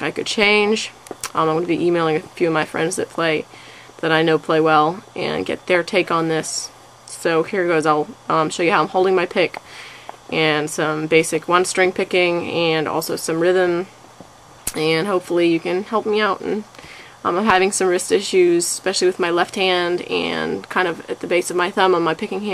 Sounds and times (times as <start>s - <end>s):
Speech: 0.0s - 9.6s, 10.3s - 13.9s, 14.7s - 22.5s.